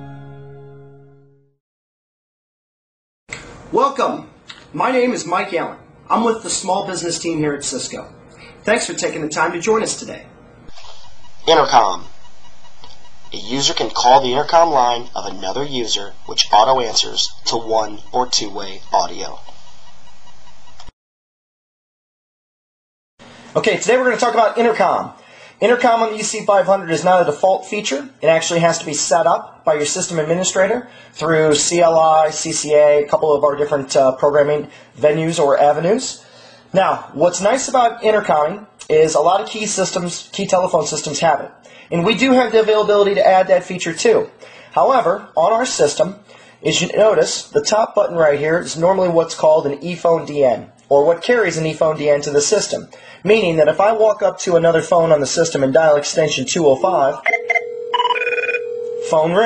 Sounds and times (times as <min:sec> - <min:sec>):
Speech: 0:03.7 - 0:12.1, 0:13.4 - 0:19.5, 0:23.6 - 0:36.2, 0:36.8 - 0:57.3, 0:59.0 - 0:59.4.